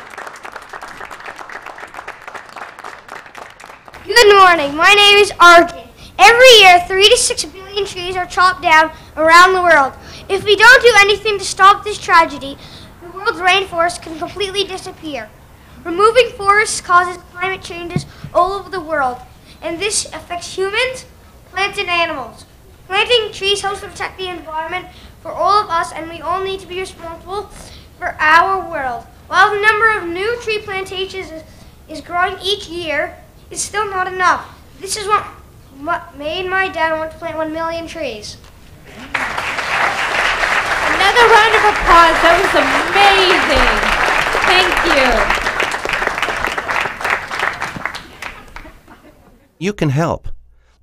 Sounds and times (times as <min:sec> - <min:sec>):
Child speech, kid speaking: 0:04.0 - 0:38.4, 0:40.9 - 0:45.4
Narration, monologue: 0:04.0 - 0:38.9, 0:49.5 - 0:50.8.